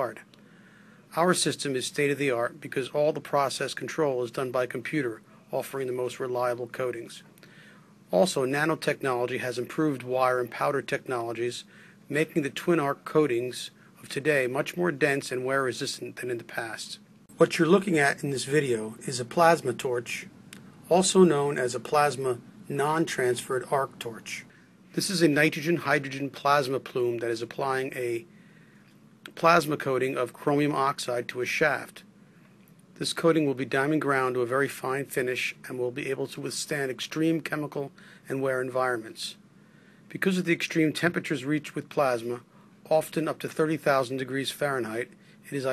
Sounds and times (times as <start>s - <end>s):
Speech: 0.0s - 0.3s, 1.1s - 7.3s, 8.1s - 28.3s, 29.2s - 32.1s, 33.0s - 39.4s, 40.1s - 45.7s.